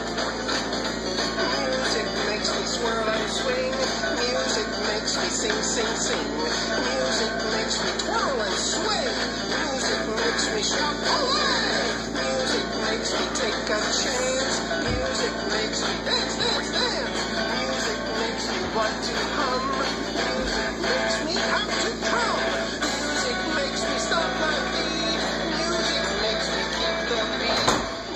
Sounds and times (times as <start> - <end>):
Music: 0.0 - 28.1.